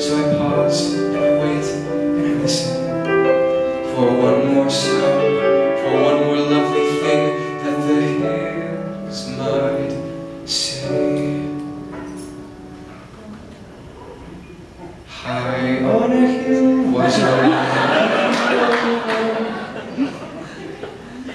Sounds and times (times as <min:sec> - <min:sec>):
Music: 0:00.0 - 0:18.0.